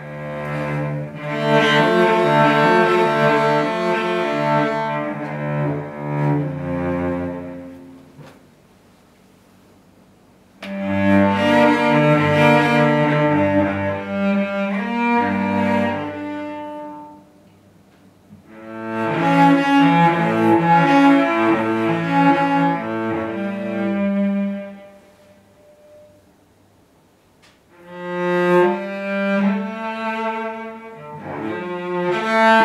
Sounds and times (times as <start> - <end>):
Cello: 0.0 - 8.4, 10.6 - 17.6, 18.3 - 26.4, 27.6 - 32.6.